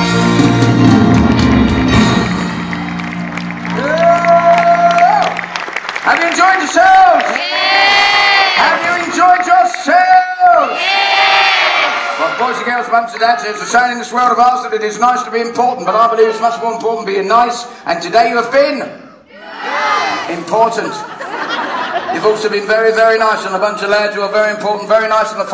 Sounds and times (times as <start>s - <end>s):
Inside, large room or hall: 0.0s - 25.5s.